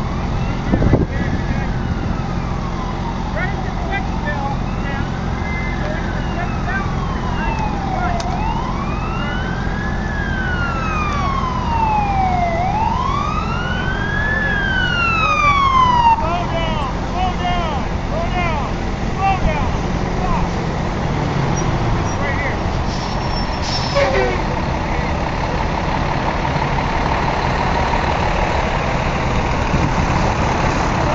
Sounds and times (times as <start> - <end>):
Police car (siren): 0.0 - 18.6
Fire: 0.0 - 31.1
Fire engine, fire truck (siren): 0.0 - 31.1.